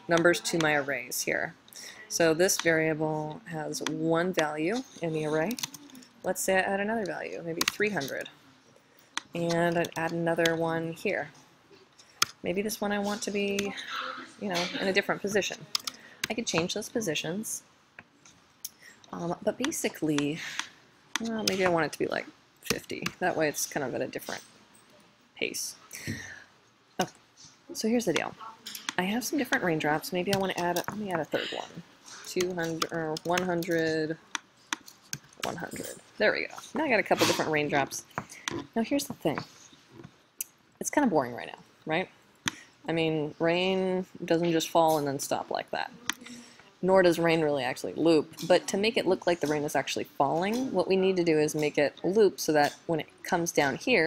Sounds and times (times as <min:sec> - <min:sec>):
Speech: 0:00.0 - 0:08.3, 0:09.4 - 0:11.4, 0:12.4 - 0:15.6, 0:16.3 - 0:17.6, 0:19.1 - 0:20.5, 0:21.2 - 0:24.4, 0:25.4 - 0:26.2, 0:27.7 - 0:34.2, 0:35.4 - 0:38.1, 0:38.7 - 0:39.5, 0:40.8 - 0:42.1, 0:42.9 - 0:54.0.